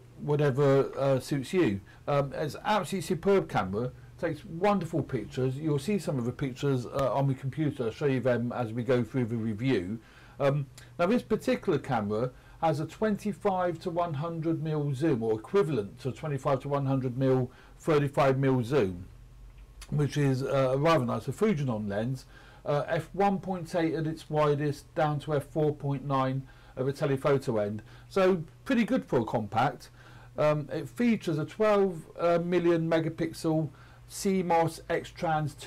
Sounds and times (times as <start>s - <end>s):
Speech: 0.0s - 19.1s, 19.8s - 35.6s.